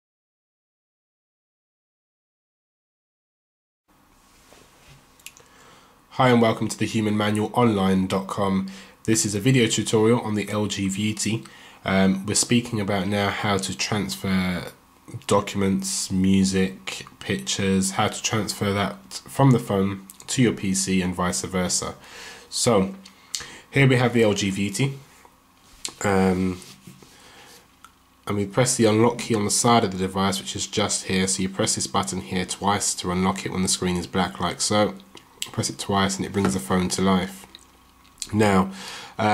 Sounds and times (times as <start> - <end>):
Inside, small room: 3.9 - 39.3
Speech: 6.1 - 23.0, 23.7 - 25.0, 25.9 - 26.8, 28.2 - 37.5, 38.2 - 39.3.